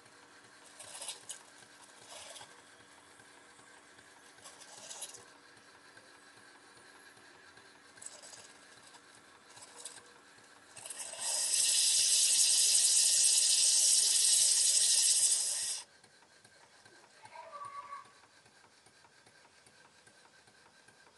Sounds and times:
Hiss: 10.8s - 15.9s.

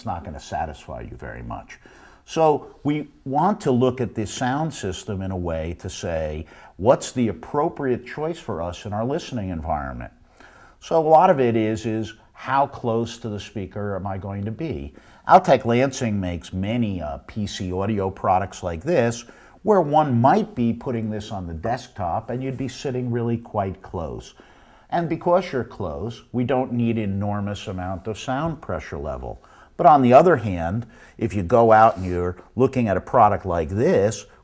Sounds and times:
Speech: 0.0s - 10.2s, 10.8s - 34.4s.

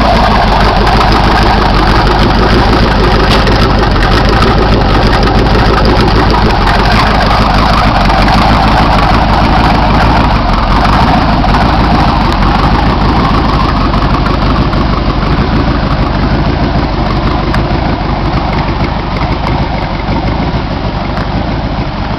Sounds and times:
Car: 0.0s - 22.1s
Idling: 0.0s - 22.1s.

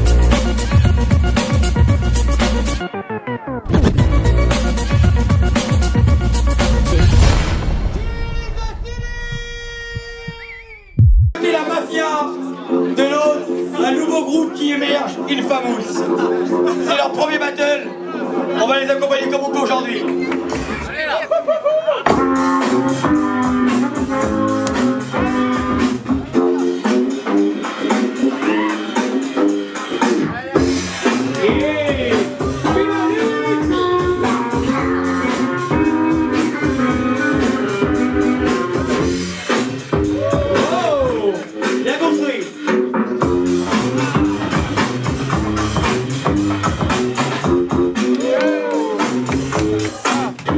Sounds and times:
Music: 0.0s - 50.5s
Speech: 11.4s - 21.3s, 40.6s - 42.5s.

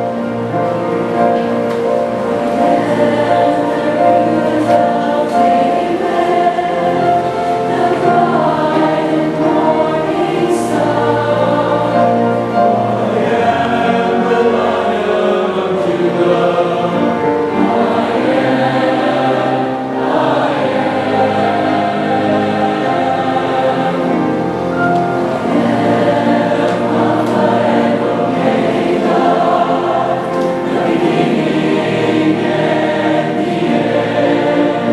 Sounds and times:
Choir: 0.0s - 34.9s.

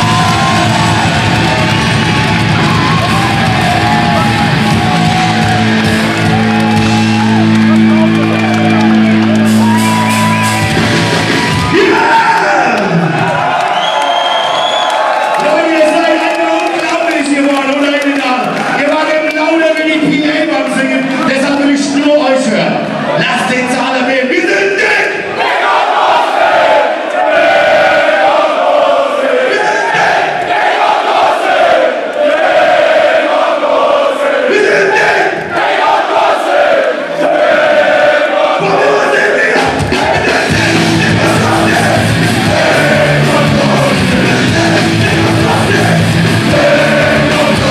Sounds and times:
Music: 0.0s - 12.0s, 38.6s - 47.7s
Speech: 15.4s - 25.2s.

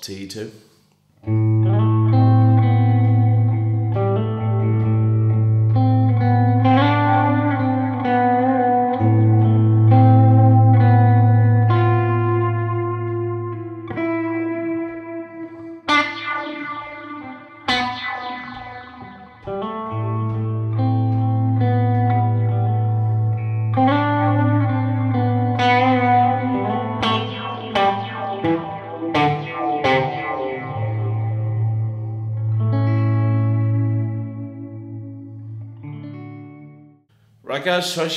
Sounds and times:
Distortion: 0.0s - 38.1s
Effects unit: 1.0s - 37.4s
Electric guitar: 1.2s - 37.0s
Echo: 13.1s - 34.0s.

